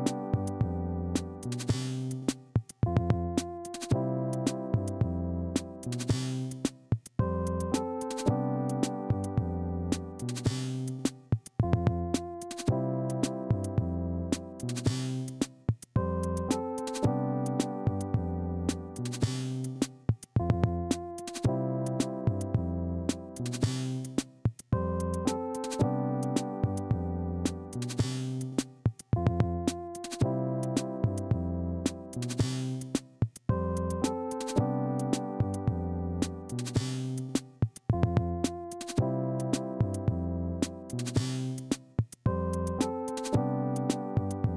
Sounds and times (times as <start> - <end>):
Background music: 0.0 - 44.5
Synthesizer: 0.0 - 44.5.